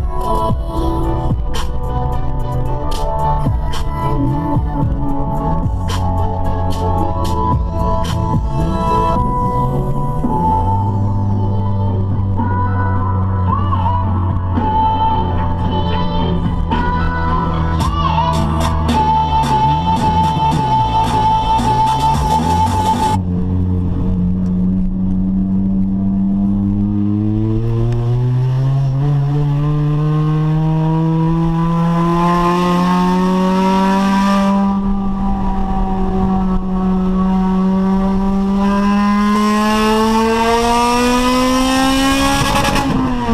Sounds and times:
Music: 0.0s - 23.2s.

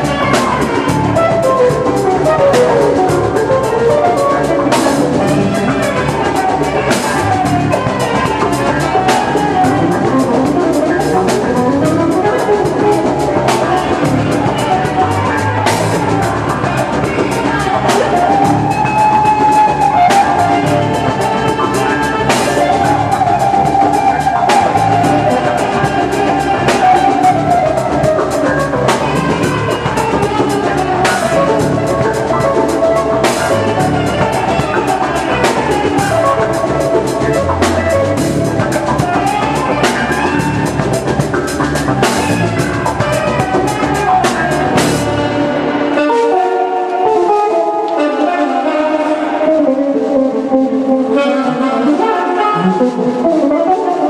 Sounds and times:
Electric guitar: 0.0s - 54.0s.

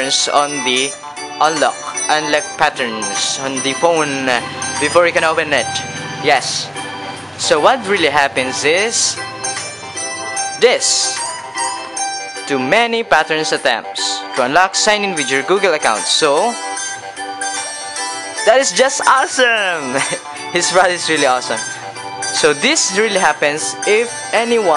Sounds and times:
Speech: 0.0s - 6.7s, 7.4s - 9.2s, 18.5s - 20.0s, 20.6s - 21.6s, 22.4s - 24.7s
Music: 0.0s - 24.7s.

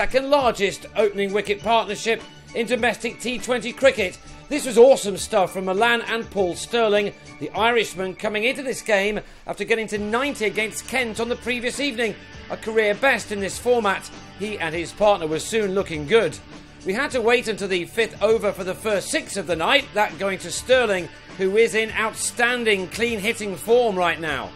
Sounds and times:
Music: 0.0s - 24.5s
Speech: 0.0s - 24.5s.

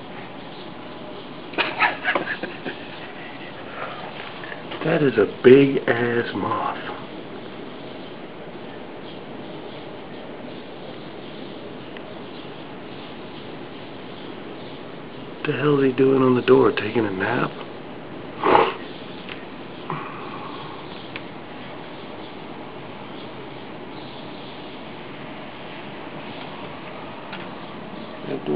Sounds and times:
Speech: 4.8s - 7.0s, 15.4s - 17.6s, 28.2s - 28.5s.

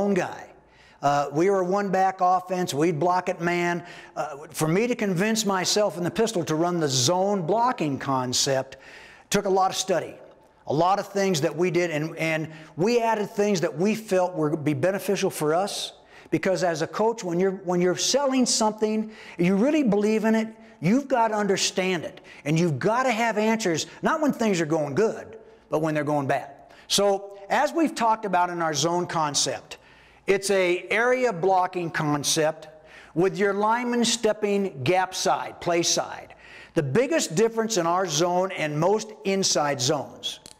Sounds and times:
Speech: 0.0s - 40.5s.

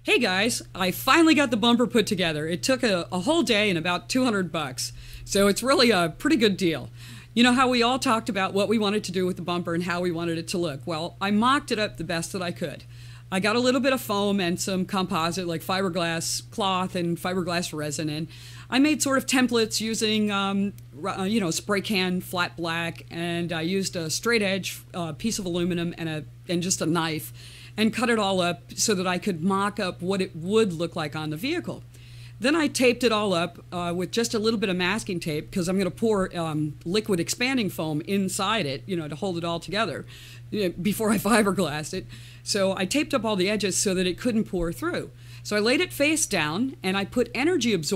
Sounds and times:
Speech: 0.1s - 31.8s, 32.4s - 47.9s.

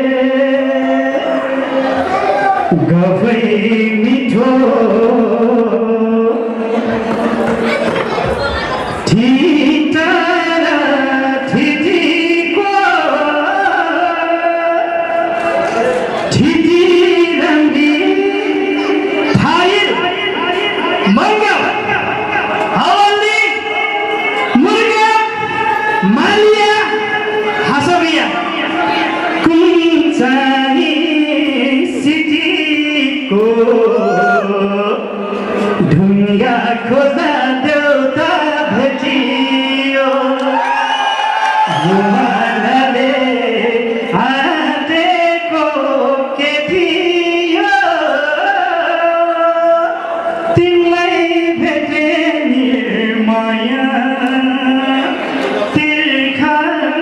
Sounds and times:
Male singing: 0.0s - 7.1s, 9.1s - 40.6s, 41.7s - 57.0s.

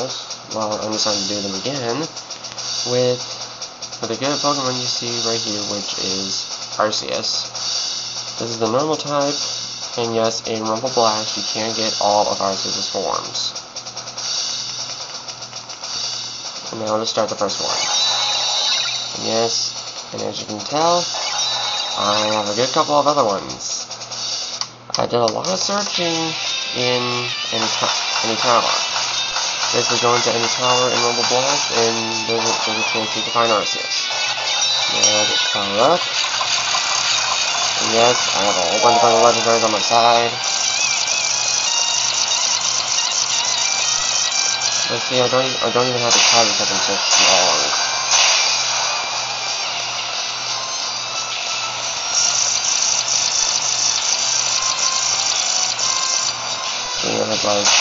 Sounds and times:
Speech: 0.0s - 2.1s, 2.9s - 3.2s, 4.0s - 7.5s, 8.4s - 9.4s, 10.0s - 13.5s, 16.7s - 17.9s, 19.2s - 21.2s, 22.0s - 23.8s, 25.0s - 28.8s, 29.8s - 34.0s, 34.9s - 36.1s, 37.8s - 40.4s, 44.9s - 47.7s, 57.0s - 57.8s
Music: 0.0s - 57.8s.

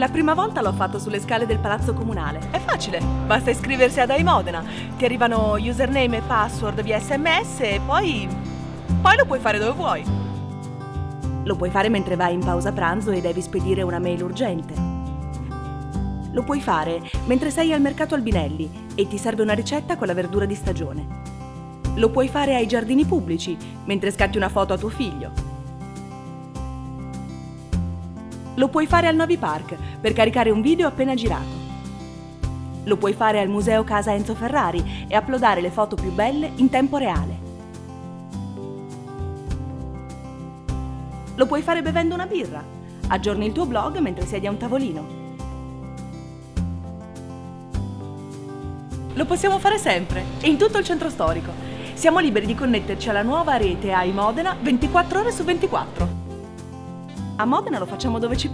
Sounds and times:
Speech: 0.0s - 8.3s, 9.0s - 10.1s, 11.5s - 14.8s, 16.4s - 21.1s, 22.0s - 25.3s, 28.6s - 31.6s, 32.9s - 37.4s, 41.4s - 45.1s, 49.1s - 56.2s, 57.4s - 58.5s
Music: 0.0s - 58.5s.

